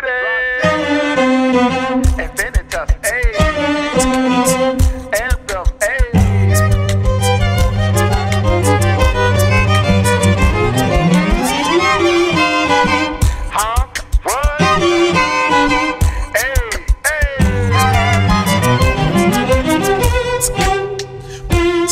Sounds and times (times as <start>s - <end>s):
Violin, fiddle: 0.6s - 5.3s, 6.2s - 16.8s, 17.4s - 21.9s.